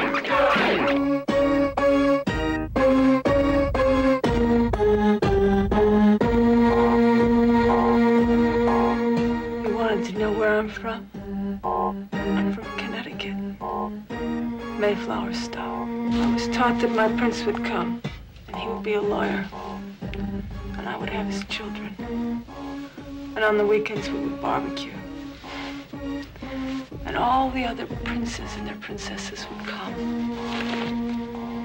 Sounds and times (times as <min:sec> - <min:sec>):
Music: 0:00.0 - 0:31.6
Speech: 0:09.6 - 0:11.0, 0:12.3 - 0:13.4, 0:14.8 - 0:15.8, 0:16.4 - 0:19.5, 0:20.8 - 0:22.0, 0:23.4 - 0:25.0, 0:27.1 - 0:30.0.